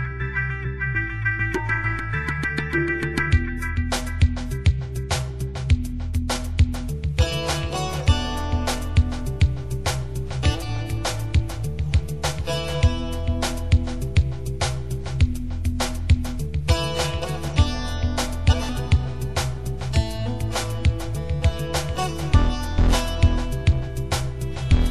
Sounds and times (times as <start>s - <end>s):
Soul music: 0.0s - 24.9s.